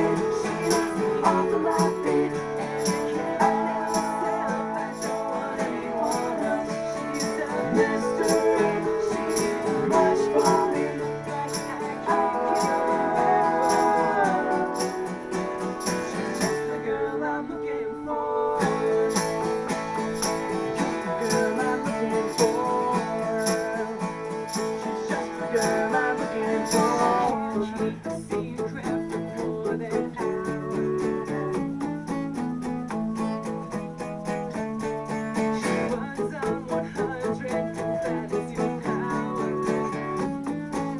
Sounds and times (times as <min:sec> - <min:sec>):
Singing: 0:00.0 - 0:31.9, 0:35.6 - 0:40.9
Music: 0:00.0 - 0:40.9.